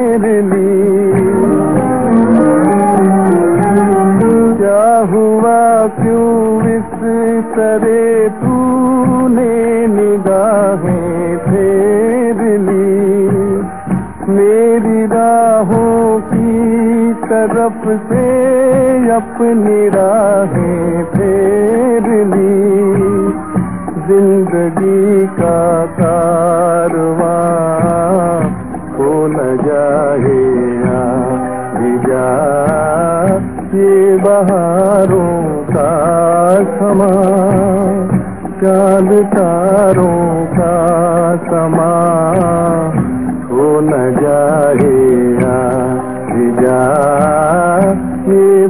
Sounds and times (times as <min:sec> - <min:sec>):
Middle Eastern music: 0:00.0 - 0:48.7.